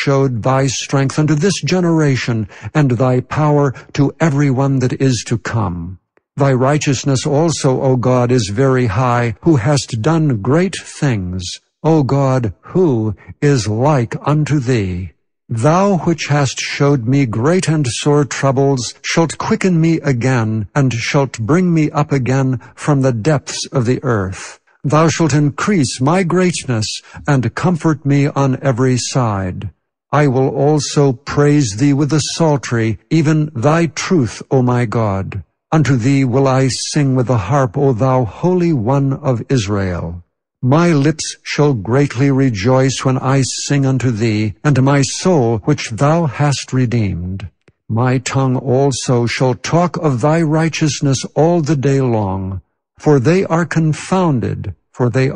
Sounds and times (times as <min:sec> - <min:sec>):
Speech: 0:00.0 - 0:55.3.